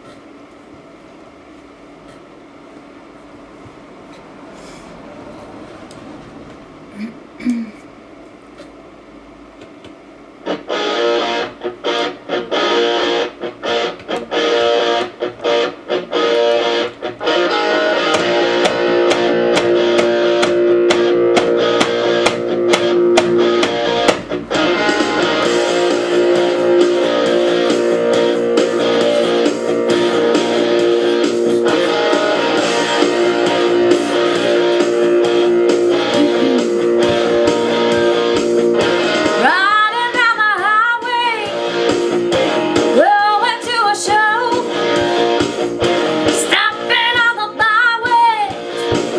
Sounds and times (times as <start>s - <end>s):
Rock and roll: 10.5s - 49.1s.